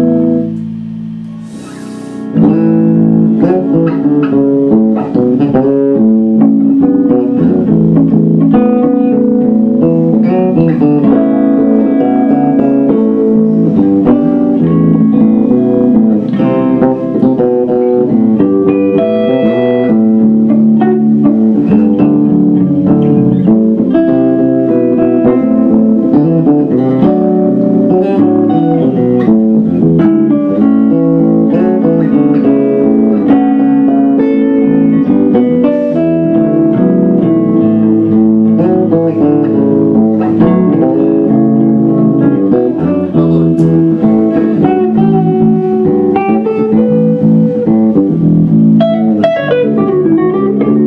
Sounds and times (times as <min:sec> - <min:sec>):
Bass guitar: 0:00.0 - 0:50.8
Electric guitar: 0:00.0 - 0:50.8.